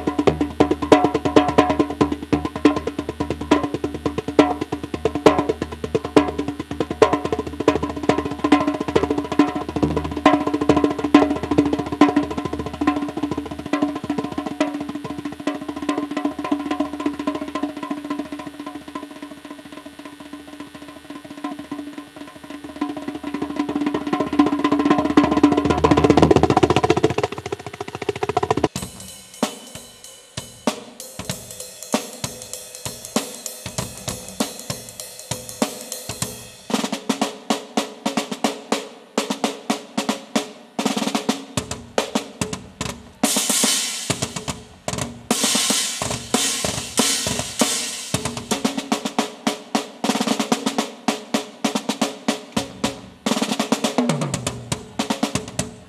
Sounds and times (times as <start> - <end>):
Bass drum: 0.0 - 18.4, 20.6 - 31.6, 32.2 - 36.6, 44.1 - 48.7
Drum kit: 0.0 - 55.8.